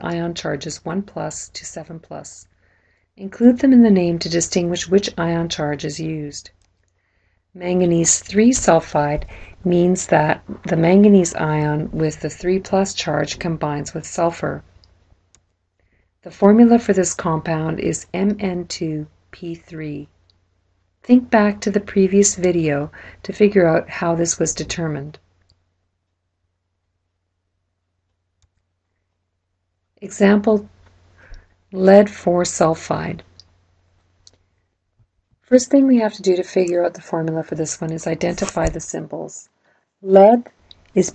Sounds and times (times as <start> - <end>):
Speech: 0.0 - 2.5, 3.2 - 6.5, 7.6 - 14.7, 16.3 - 20.1, 21.1 - 25.2, 30.0 - 30.7, 31.8 - 33.3, 35.5 - 41.1.